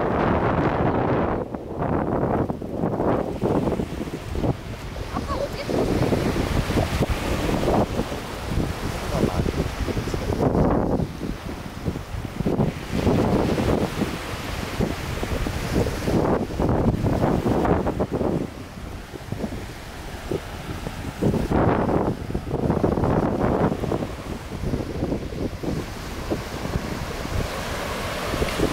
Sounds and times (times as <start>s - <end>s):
Waves, surf: 0.0s - 28.7s
Wind noise (microphone): 0.0s - 28.7s.